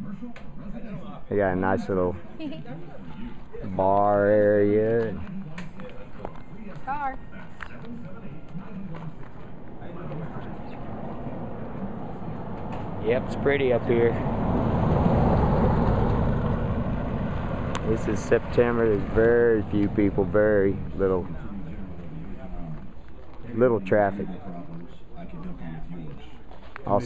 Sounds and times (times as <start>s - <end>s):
Outside, rural or natural: 0.0s - 27.0s.